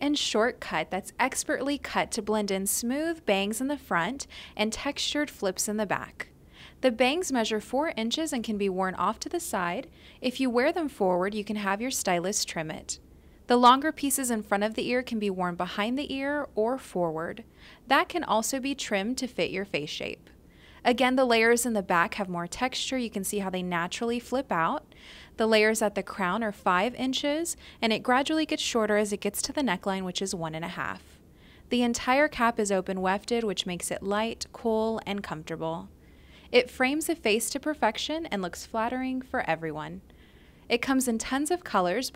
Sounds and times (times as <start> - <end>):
Speech: 0.0 - 6.2, 6.8 - 20.2, 20.8 - 24.8, 25.4 - 31.1, 31.7 - 35.9, 36.5 - 40.0, 40.7 - 42.1.